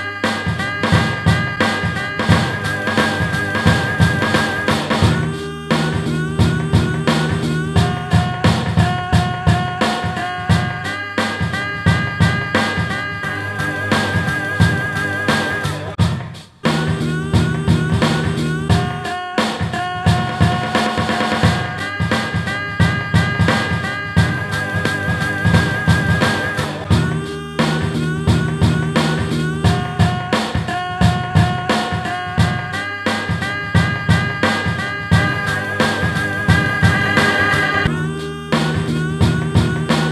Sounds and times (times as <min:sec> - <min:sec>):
Music: 0:00.0 - 0:40.1.